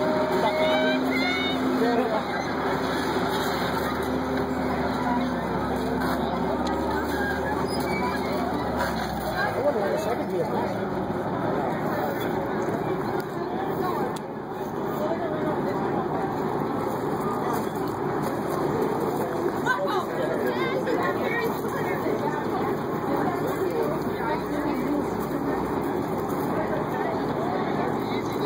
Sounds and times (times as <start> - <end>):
Speech: 0.0 - 28.4.